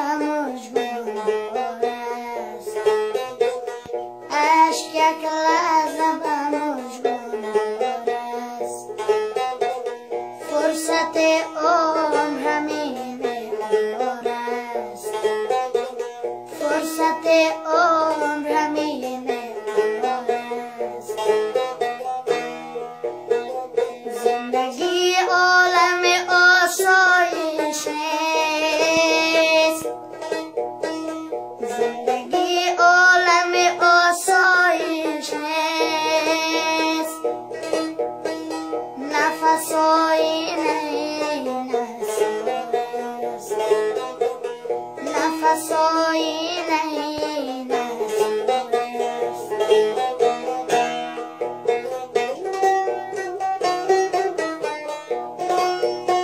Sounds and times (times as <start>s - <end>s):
Music: 0.0s - 56.2s.